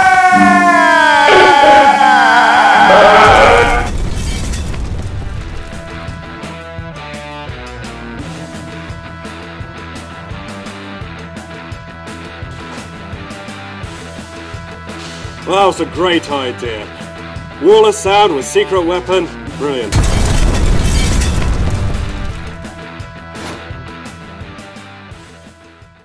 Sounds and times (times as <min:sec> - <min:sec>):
Music: 0:00.0 - 0:26.0
Boom: 0:03.1 - 0:06.4, 0:20.0 - 0:22.8
Speech: 0:15.4 - 0:16.9, 0:17.6 - 0:20.0.